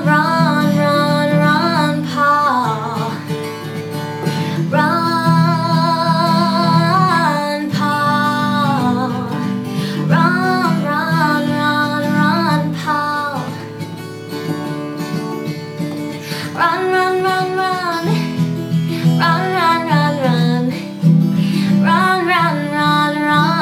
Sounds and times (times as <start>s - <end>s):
Female singing: 0.0s - 3.4s, 4.5s - 13.7s, 16.4s - 23.6s
Guitar: 0.0s - 23.6s
Inside, small room: 0.0s - 23.6s.